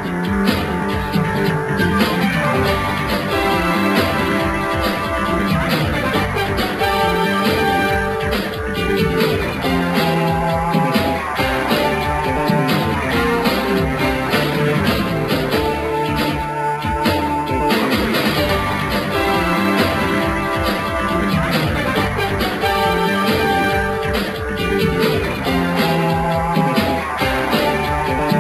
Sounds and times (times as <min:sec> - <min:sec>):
Theme music: 0:00.0 - 0:28.4.